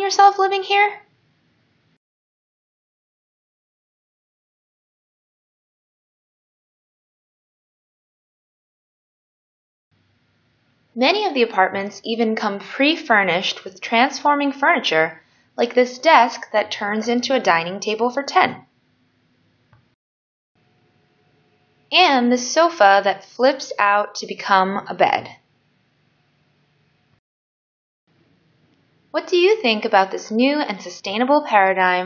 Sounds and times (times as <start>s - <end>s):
Speech: 0.0s - 1.0s, 11.0s - 18.6s, 22.0s - 25.4s, 29.2s - 32.0s.